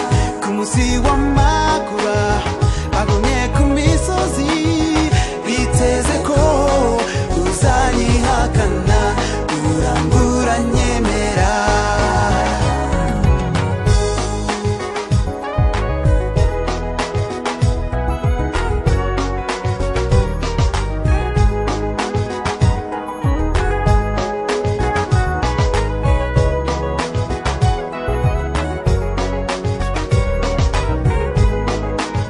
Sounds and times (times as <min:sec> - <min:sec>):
Afrobeat: 0:00.0 - 0:32.3.